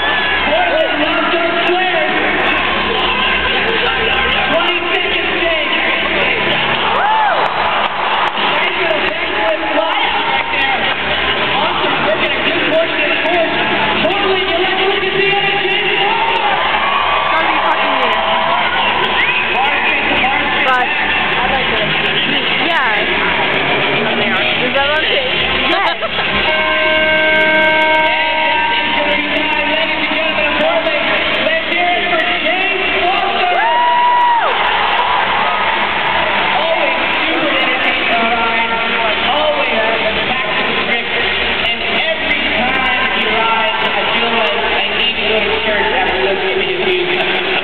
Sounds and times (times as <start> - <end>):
Music: 0.0 - 47.6
Speech: 0.4 - 6.7, 8.4 - 16.5, 19.5 - 23.2, 23.9 - 26.3, 28.2 - 33.7, 36.6 - 47.6.